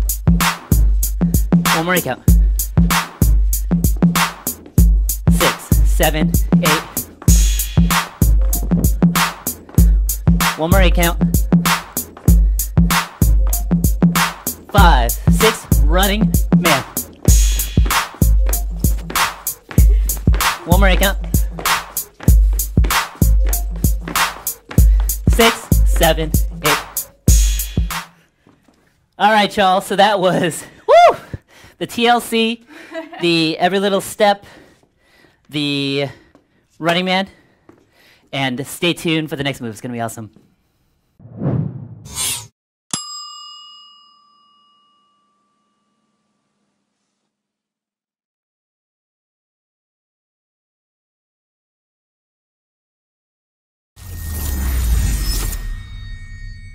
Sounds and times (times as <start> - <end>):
Silence: 41.2 - 42.2.